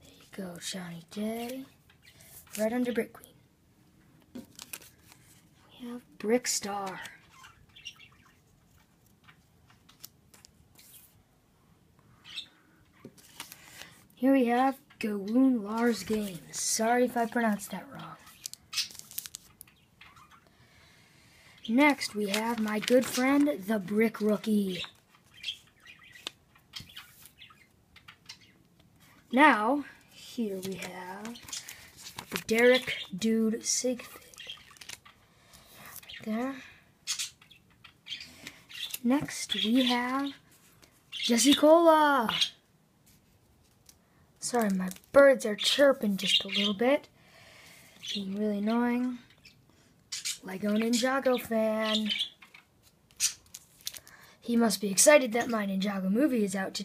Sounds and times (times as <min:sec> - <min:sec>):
Speech: 0:00.3 - 0:01.7, 0:02.6 - 0:03.3, 0:05.7 - 0:07.2, 0:14.2 - 0:18.2, 0:21.7 - 0:24.9, 0:29.3 - 0:31.4, 0:32.5 - 0:34.2, 0:36.2 - 0:36.7, 0:39.0 - 0:40.4, 0:41.3 - 0:42.5, 0:44.4 - 0:47.1, 0:48.2 - 0:49.2, 0:50.5 - 0:52.2, 0:54.5 - 0:56.8.